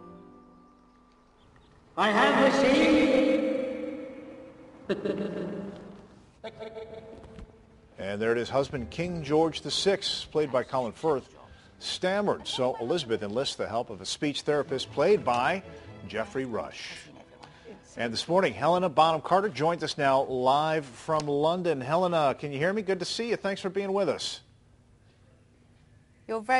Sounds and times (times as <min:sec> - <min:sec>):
Music: 0:00.0 - 0:01.3, 0:08.4 - 0:09.6, 0:14.2 - 0:18.0
Male speech, man speaking: 0:02.0 - 0:03.6, 0:08.0 - 0:17.1, 0:18.0 - 0:24.5.